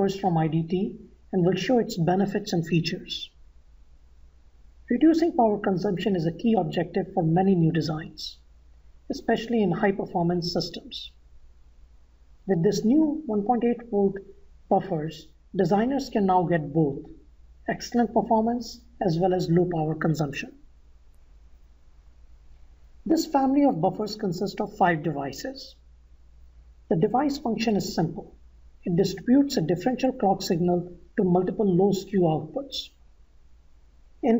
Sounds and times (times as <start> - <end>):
Speech: 0.0 - 3.4, 4.9 - 8.4, 9.1 - 11.2, 12.5 - 20.6, 23.0 - 25.8, 26.9 - 33.0.